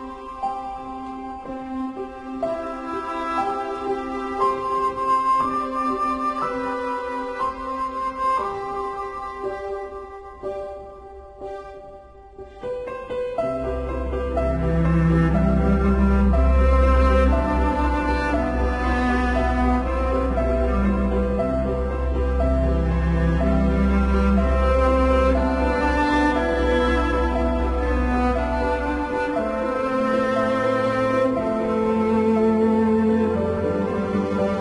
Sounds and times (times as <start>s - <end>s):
Music: 0.0s - 34.6s.